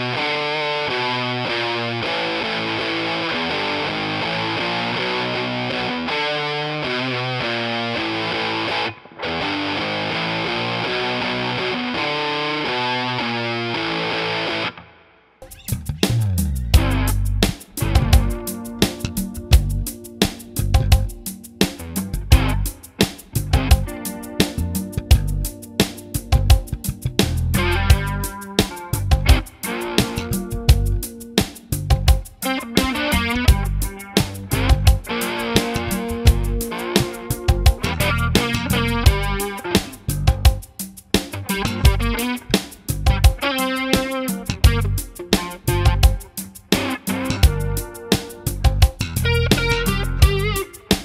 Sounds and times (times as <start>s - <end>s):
Music: 0.0s - 51.0s.